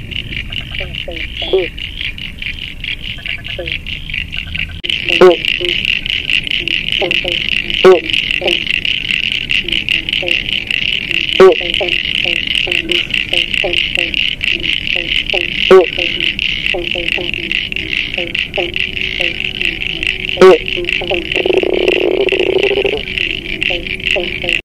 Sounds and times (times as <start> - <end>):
Frog: 0.0 - 24.6.